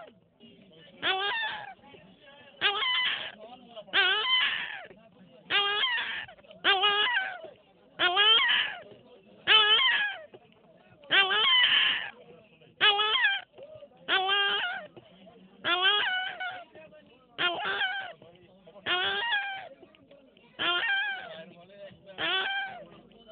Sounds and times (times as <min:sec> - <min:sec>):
Speech: 0:00.0 - 0:23.3.